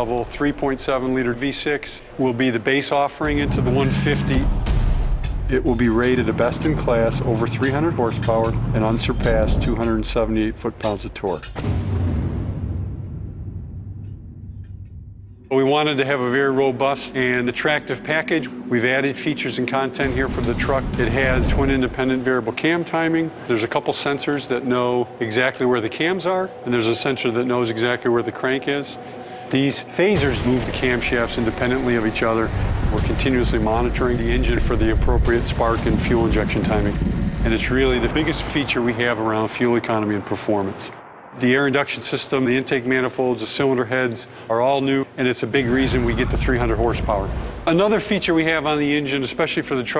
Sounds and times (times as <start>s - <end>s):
Speech: 0.0s - 4.5s, 5.5s - 11.6s, 15.5s - 49.9s
Music: 2.1s - 39.1s.